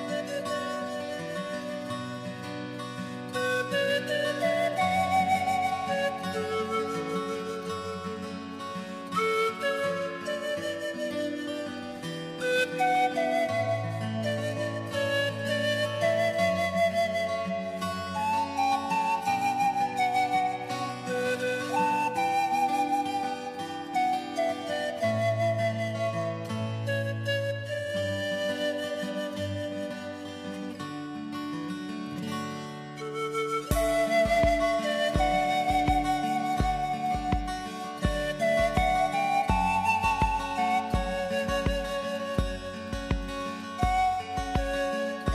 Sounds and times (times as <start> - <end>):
Music: 0.0 - 45.3.